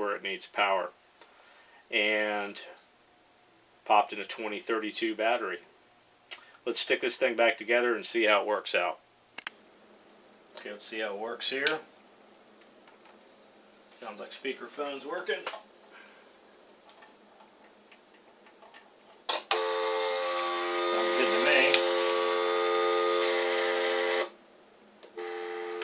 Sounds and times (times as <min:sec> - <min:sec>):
Speech: 0:00.0 - 0:01.0, 0:01.9 - 0:02.8, 0:03.8 - 0:05.7, 0:06.6 - 0:09.0, 0:10.6 - 0:11.9, 0:14.0 - 0:15.6, 0:20.8 - 0:21.8.